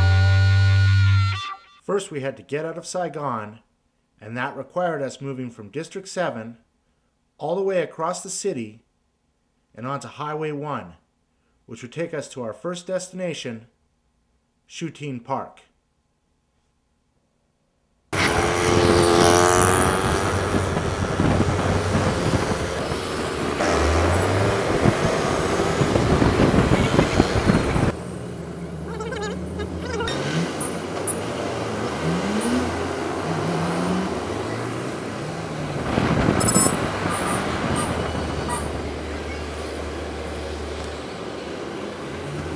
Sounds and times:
Outside, urban or manmade: 0.0 - 1.9, 17.8 - 42.5
Motorcycle: 18.2 - 42.5.

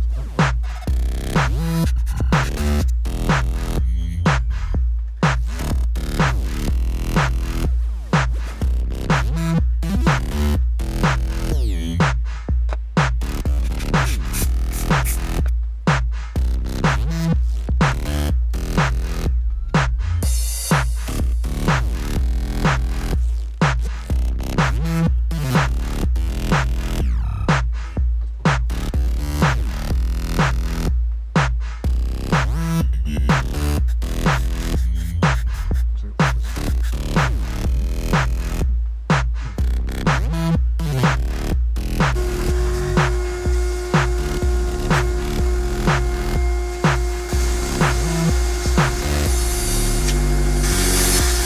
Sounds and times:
Music: 0.0 - 51.4.

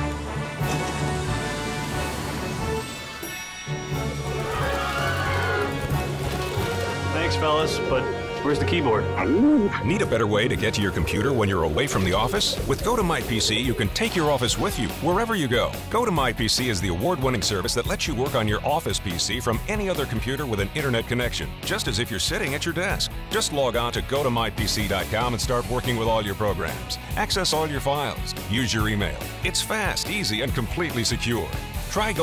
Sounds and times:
Music: 0.0 - 32.2
Speech: 7.1 - 32.2.

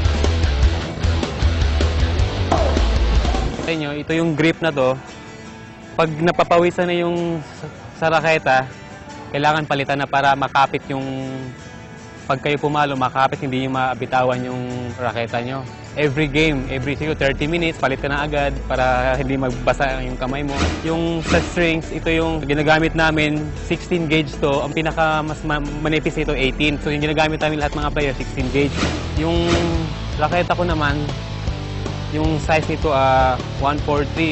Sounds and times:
Music: 0.0 - 34.3
Speech: 3.6 - 5.0, 6.0 - 7.4, 12.3 - 31.1, 32.1 - 34.3.

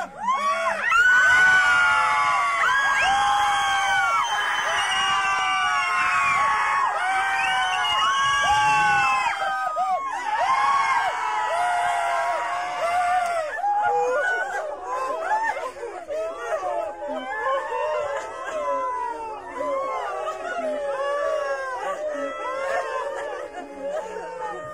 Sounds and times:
Screaming: 0.0 - 15.7, 16.3 - 24.7.

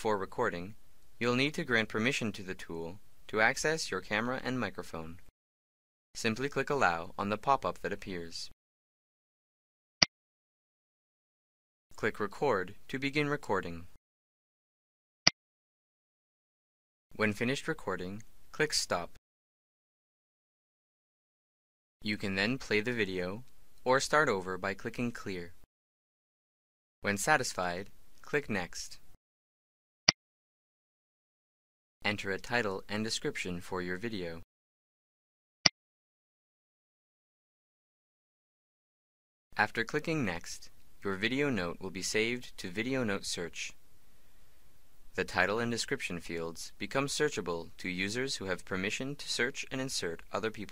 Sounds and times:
Speech: 0.0 - 5.3, 6.2 - 8.6, 12.0 - 14.0, 17.1 - 19.2, 22.0 - 25.6, 27.0 - 29.1, 32.0 - 34.5, 39.6 - 43.8, 45.1 - 50.7.

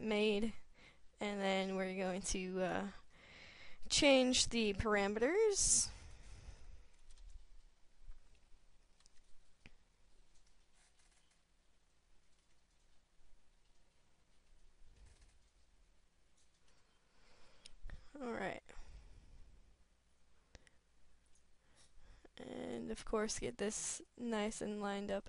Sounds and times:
Speech: 1.2 - 3.0, 3.9 - 5.9, 18.2 - 18.7, 22.4 - 25.2
Silence: 5.8 - 22.5.

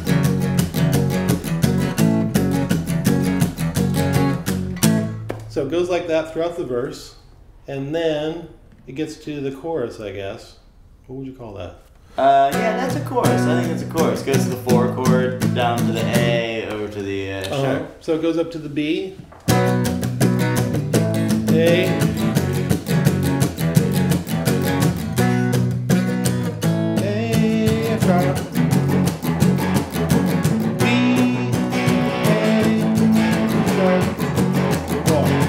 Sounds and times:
Blues: 0.0 - 5.8, 12.0 - 18.0, 19.1 - 35.4
Guitar: 0.0 - 7.0, 12.0 - 18.0, 19.1 - 35.4
Singing: 21.5 - 22.2, 27.0 - 28.4, 30.8 - 34.2.

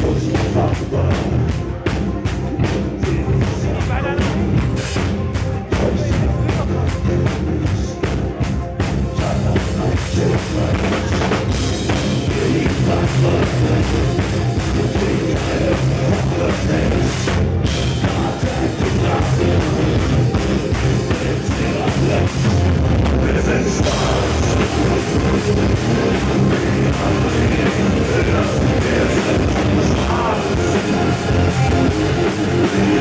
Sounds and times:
Singing: 0.0 - 2.0, 5.6 - 33.0
Music: 0.0 - 33.0.

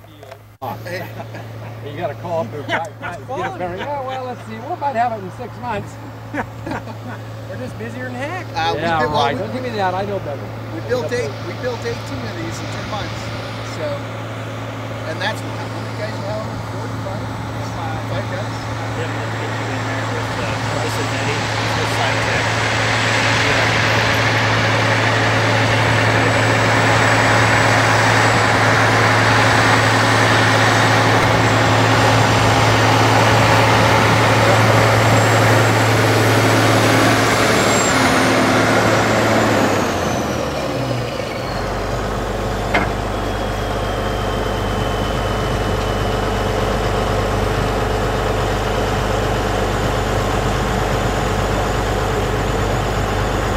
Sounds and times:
Outside, rural or natural: 0.0 - 53.5
Truck: 0.0 - 53.5.

